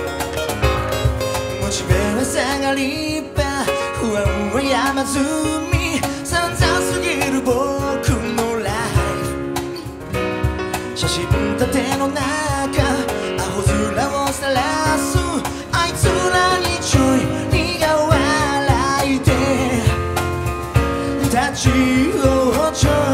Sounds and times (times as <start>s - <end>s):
Music: 0.0s - 23.1s.